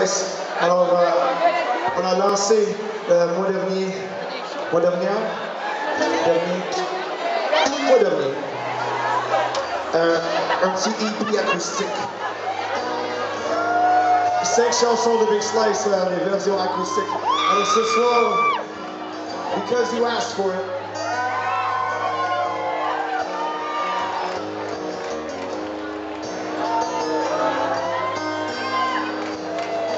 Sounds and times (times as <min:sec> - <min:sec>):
Crowd: 0:00.0 - 0:29.9
Music: 0:05.7 - 0:29.9.